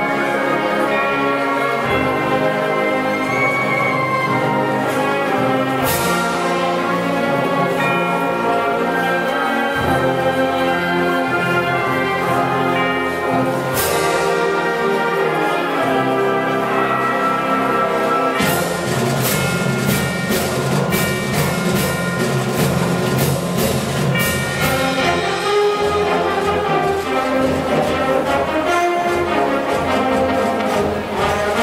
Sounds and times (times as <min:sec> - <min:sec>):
Orchestra: 0:00.0 - 0:31.6.